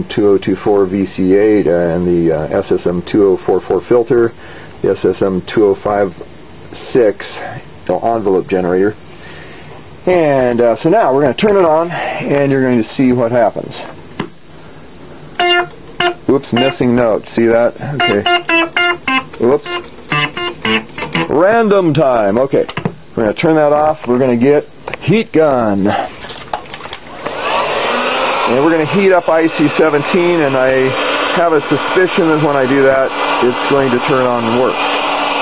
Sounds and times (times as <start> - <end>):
Speech: 0.0 - 9.0, 10.0 - 14.0, 16.2 - 18.4, 19.4 - 19.7, 21.3 - 26.2, 28.5 - 34.8.